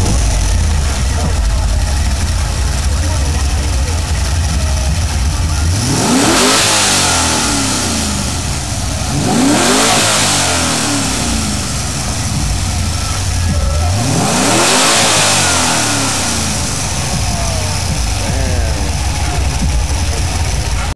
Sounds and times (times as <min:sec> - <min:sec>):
Medium engine (mid frequency): 0:00.0 - 0:20.9
Vehicle: 0:00.0 - 0:20.9
Accelerating, revving, vroom: 0:05.5 - 0:20.9.